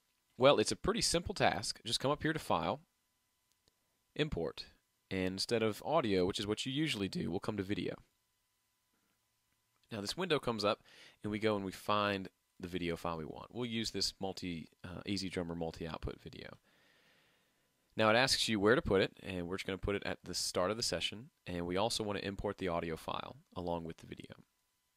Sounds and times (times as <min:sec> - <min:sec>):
Speech: 0:00.4 - 0:02.9, 0:04.2 - 0:08.1, 0:09.9 - 0:16.6, 0:18.0 - 0:24.5.